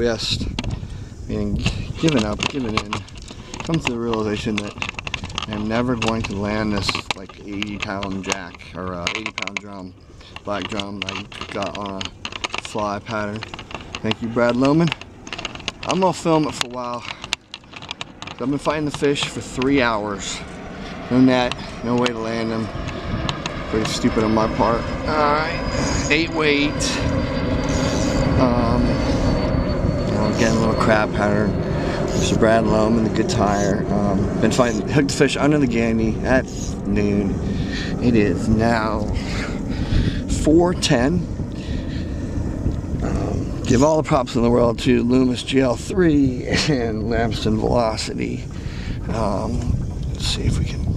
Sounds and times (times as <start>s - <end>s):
Speech: 0.0s - 0.5s, 1.3s - 3.0s, 3.7s - 4.8s, 5.4s - 9.9s, 10.5s - 12.1s, 12.7s - 13.4s, 14.0s - 15.0s, 15.9s - 17.2s, 18.4s - 20.4s, 21.1s - 22.7s, 23.7s - 27.1s, 28.4s - 29.0s, 30.1s - 39.2s, 40.2s - 41.3s, 43.0s - 48.4s, 49.1s - 50.8s.